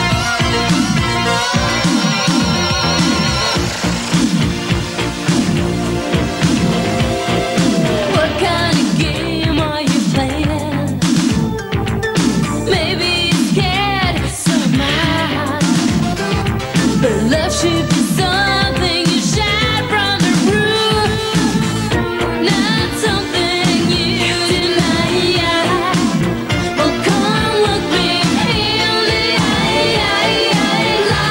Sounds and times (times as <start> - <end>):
Pop music: 0.0 - 31.3.